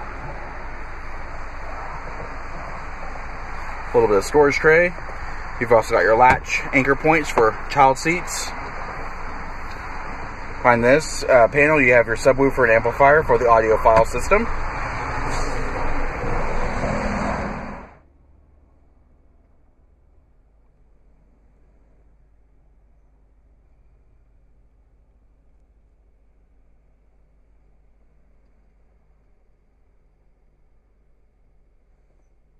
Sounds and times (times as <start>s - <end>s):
Vehicle: 0.0s - 32.5s
Speech: 3.9s - 5.0s, 5.6s - 8.6s, 10.6s - 14.5s.